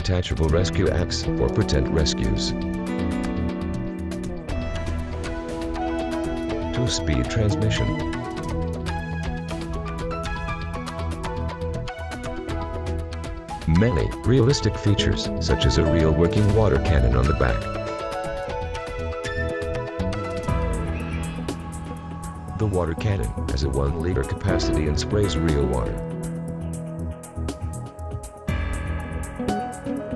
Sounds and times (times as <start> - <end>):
Speech: 0.0 - 2.6, 6.8 - 8.1, 13.7 - 17.8, 22.6 - 26.0
Music: 0.0 - 30.1.